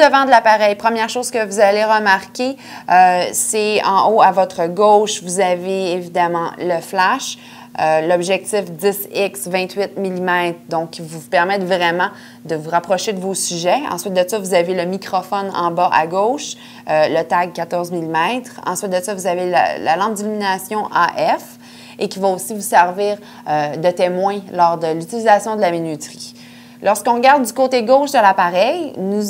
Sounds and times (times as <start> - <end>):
Speech: 0.0 - 29.2.